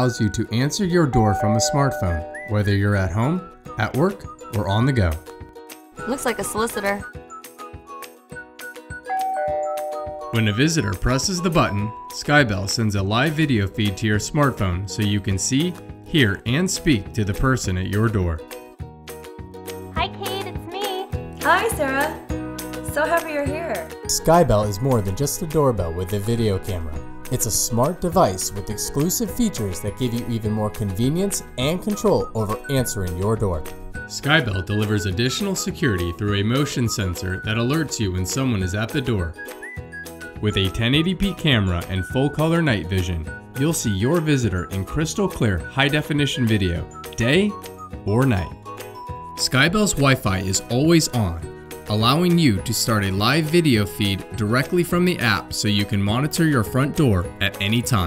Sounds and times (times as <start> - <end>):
Speech: 0.0 - 5.2, 10.4 - 18.4, 23.0 - 39.3, 40.4 - 48.6, 49.4 - 58.0
Music: 0.0 - 58.0.